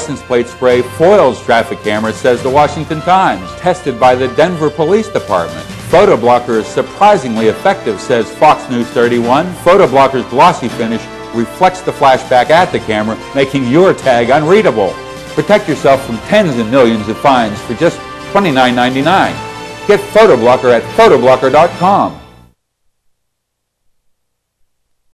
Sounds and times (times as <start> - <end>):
Speech: 0.0 - 22.2
Music: 0.0 - 22.6.